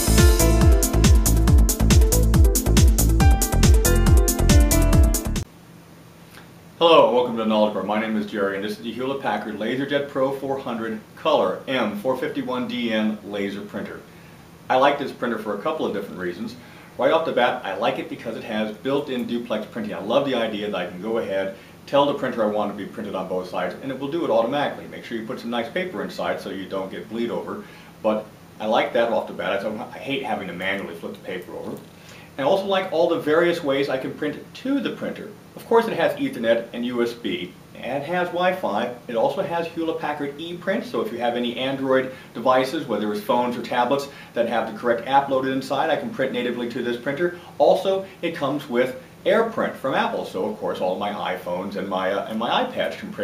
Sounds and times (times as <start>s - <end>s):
Speech: 6.8s - 14.1s, 14.7s - 53.2s.